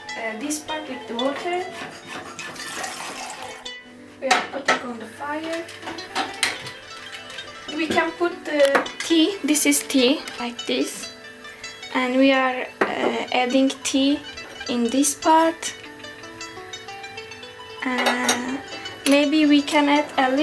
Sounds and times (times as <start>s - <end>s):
Music: 0.0s - 20.4s
Speech: 4.2s - 5.7s, 17.8s - 20.4s.